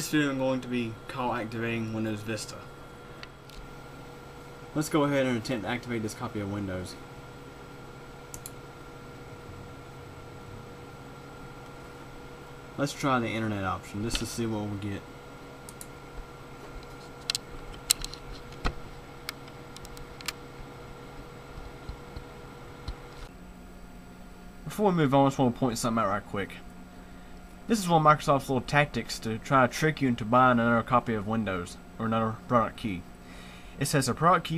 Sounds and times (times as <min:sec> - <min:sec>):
Speech: 0:00.0 - 0:02.7, 0:04.8 - 0:07.0, 0:12.8 - 0:15.1, 0:24.6 - 0:26.7, 0:27.7 - 0:33.1, 0:33.8 - 0:34.5.